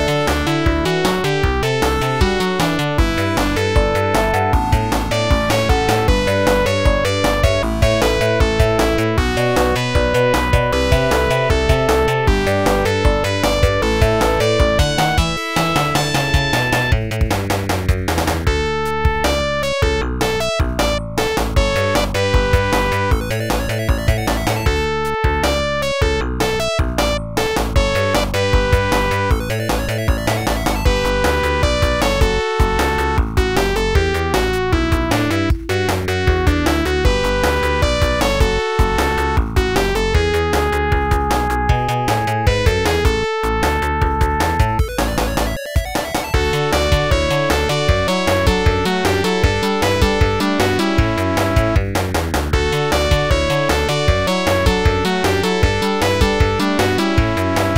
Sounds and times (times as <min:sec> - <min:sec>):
Music: 0:00.0 - 0:57.7.